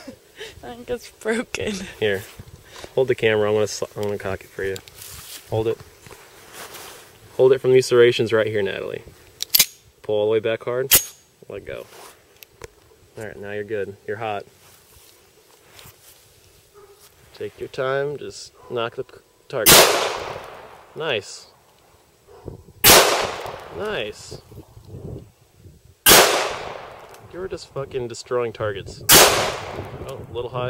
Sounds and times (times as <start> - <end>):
Outside, rural or natural: 0.0 - 30.7
Speech: 5.5 - 5.8, 7.4 - 9.1, 10.1 - 11.9, 13.2 - 14.5, 17.3 - 19.7, 21.0 - 21.5, 23.8 - 24.4, 27.3 - 29.1, 30.0 - 30.7.